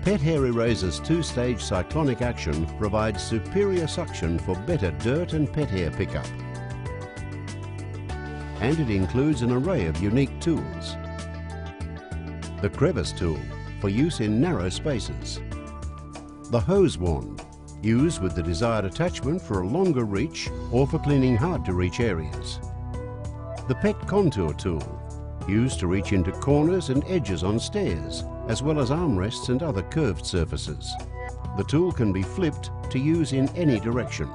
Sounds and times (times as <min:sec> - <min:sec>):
Speech: 0:00.0 - 0:06.3, 0:08.6 - 0:11.0, 0:12.6 - 0:15.4, 0:16.5 - 0:22.6, 0:23.7 - 0:31.0, 0:31.6 - 0:34.3
Music: 0:00.0 - 0:34.3.